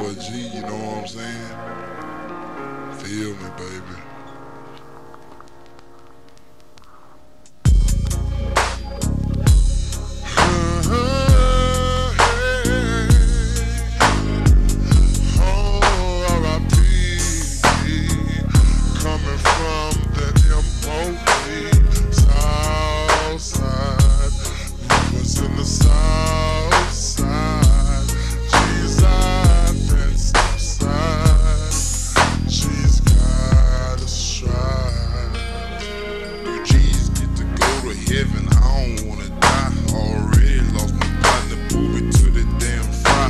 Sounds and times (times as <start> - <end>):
Music: 0.0 - 43.2.